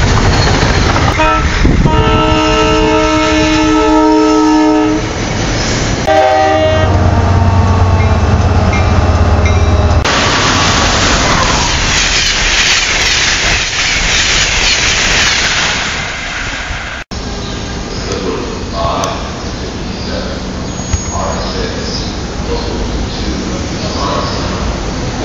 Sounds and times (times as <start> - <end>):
Railroad car, train wagon: 0.0 - 25.2
Train horn: 1.2 - 5.1, 6.1 - 8.3.